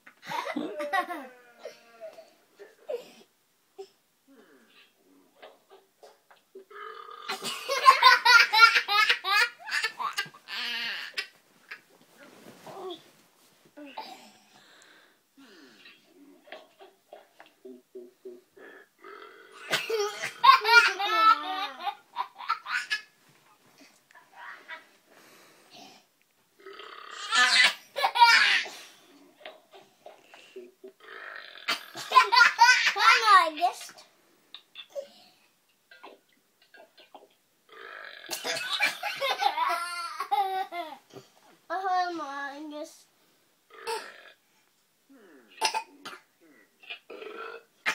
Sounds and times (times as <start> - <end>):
Child speech, kid speaking: 32.9 - 34.1, 41.7 - 43.1.